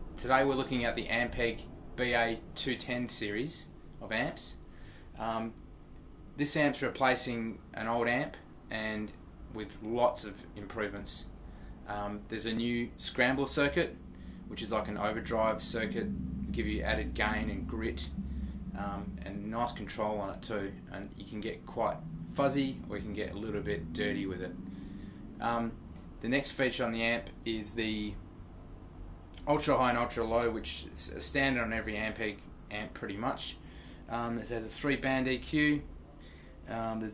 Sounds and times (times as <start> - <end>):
Speech: 0.2 - 4.6, 5.2 - 5.6, 6.4 - 11.3, 11.9 - 18.2, 18.8 - 24.6, 25.4 - 28.2, 29.4 - 35.9, 36.6 - 37.1.